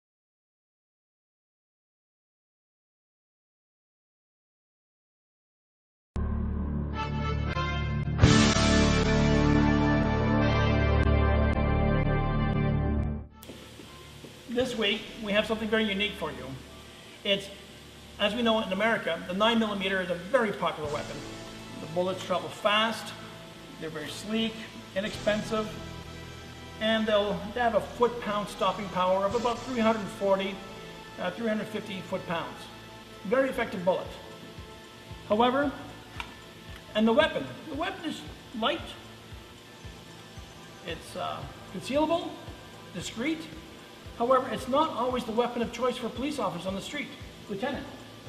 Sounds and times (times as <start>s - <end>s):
Speech: 14.5s - 16.6s, 17.2s - 17.6s, 18.2s - 21.2s, 21.8s - 23.2s, 23.8s - 25.7s, 26.8s - 30.6s, 31.2s - 32.7s, 33.3s - 34.2s, 36.9s - 39.0s, 40.9s - 42.4s, 43.0s - 43.6s, 44.2s - 48.0s.